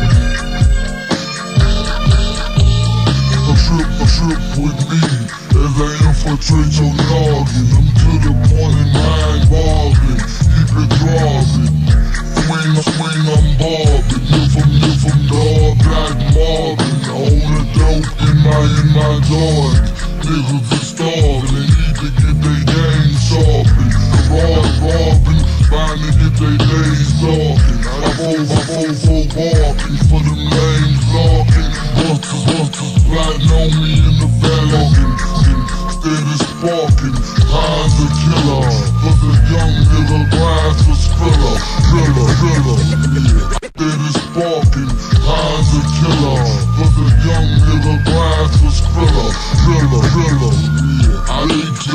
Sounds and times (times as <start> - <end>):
Music: 0.0 - 51.9.